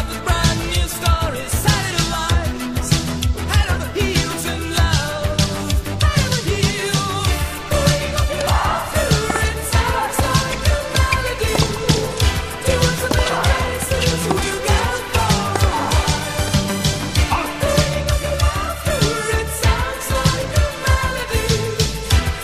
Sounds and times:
Music: 0.0 - 22.4.

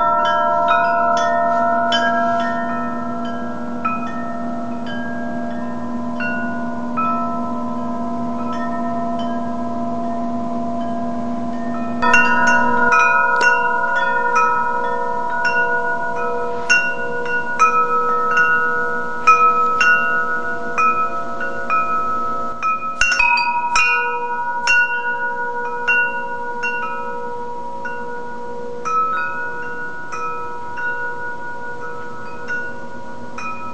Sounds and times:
Wind chime: 0.0 - 33.7.

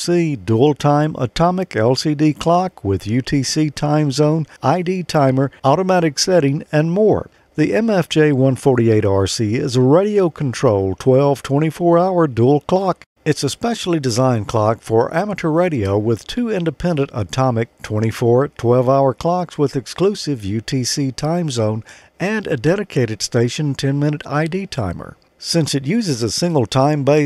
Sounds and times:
Speech: 0.0 - 27.2.

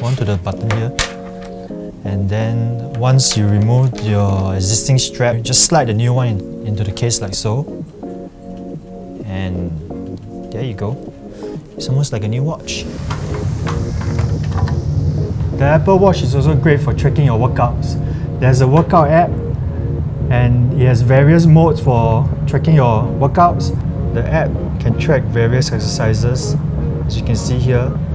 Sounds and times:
Speech: 0.0 - 1.0, 2.1 - 7.7, 9.2 - 9.8, 10.5 - 11.0, 11.8 - 12.9, 15.6 - 19.4, 20.3 - 28.0
Music: 0.0 - 28.1.

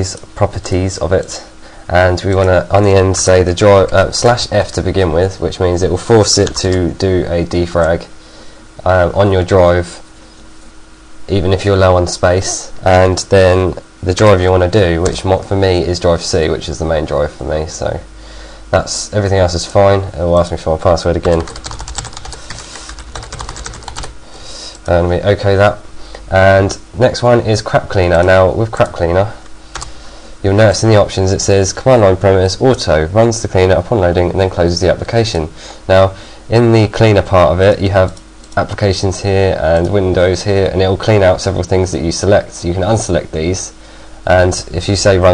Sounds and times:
Typing: 21.2 - 24.1.

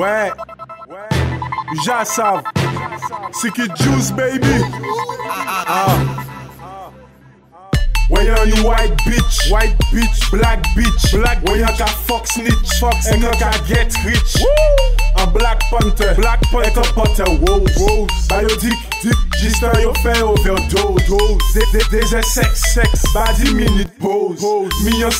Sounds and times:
Music: 0.0 - 25.1.

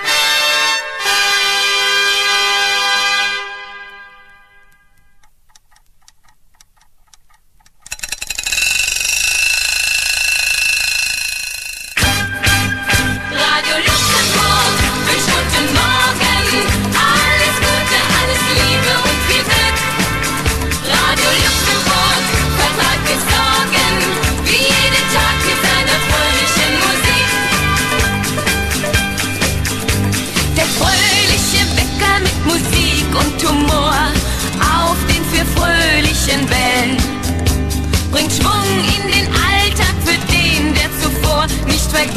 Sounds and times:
Music: 0.0 - 5.2, 12.0 - 42.1.

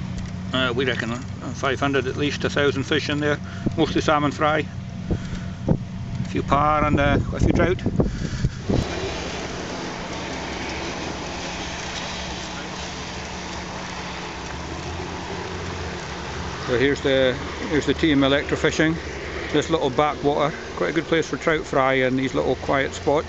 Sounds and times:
Speech: 0.6 - 4.7, 6.3 - 7.9, 16.7 - 19.0, 19.6 - 23.2
Stream: 8.3 - 23.2.

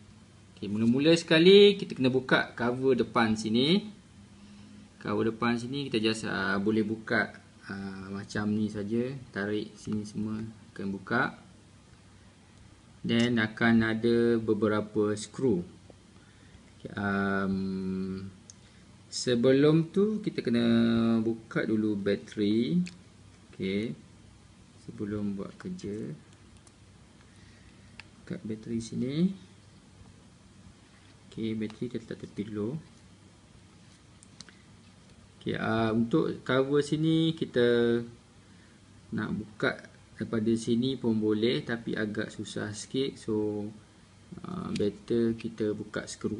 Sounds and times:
Speech: 0.6 - 4.0, 5.0 - 11.5, 13.0 - 15.8, 16.8 - 18.4, 19.1 - 24.1, 24.8 - 26.3, 28.2 - 29.5, 31.3 - 32.9, 35.4 - 38.2, 39.1 - 46.3.

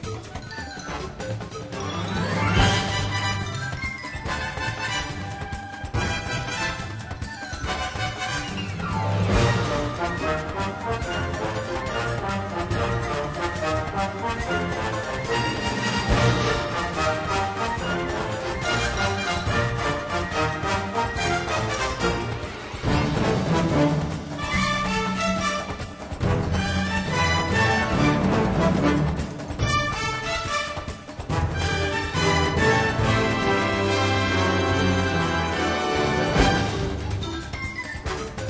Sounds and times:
Independent music: 0.0 - 38.5.

